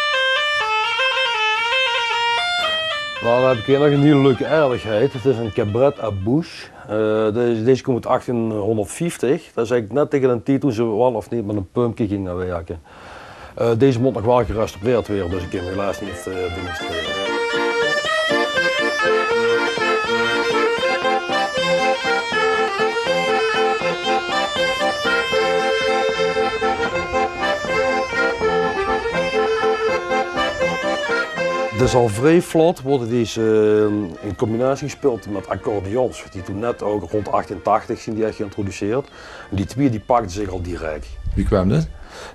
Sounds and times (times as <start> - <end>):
Wind instrument, woodwind instrument: 0.0 - 6.8, 13.7 - 42.3
Bagpipes: 0.0 - 7.0, 12.9 - 42.3
Accordion: 0.0 - 9.0, 12.9 - 42.3.